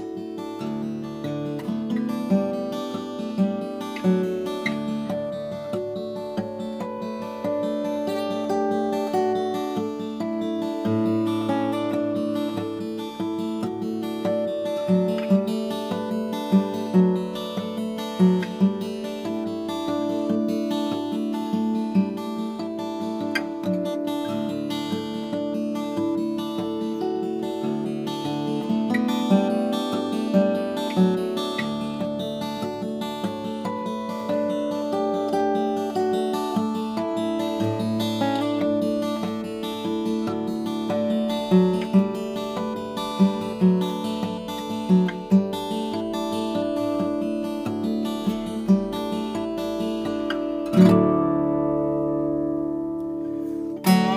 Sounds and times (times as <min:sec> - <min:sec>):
Acoustic guitar: 0:00.0 - 0:54.1.